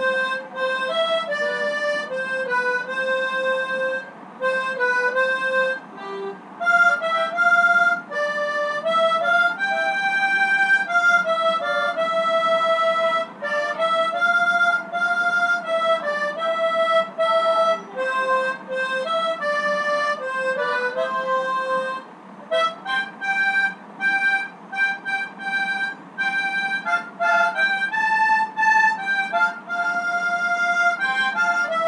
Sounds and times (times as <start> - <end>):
Harmonica: 0.0 - 31.8
Wind instrument, woodwind instrument: 0.0 - 31.8.